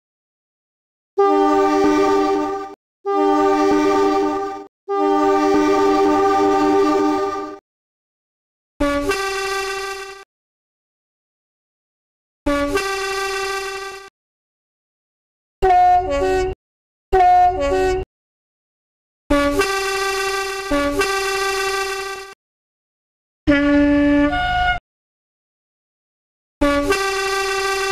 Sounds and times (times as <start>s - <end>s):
Train horn: 1.2s - 7.6s, 8.8s - 10.2s, 12.5s - 14.1s, 15.6s - 16.6s, 17.2s - 18.0s, 19.3s - 22.4s, 23.5s - 24.8s, 26.6s - 27.9s.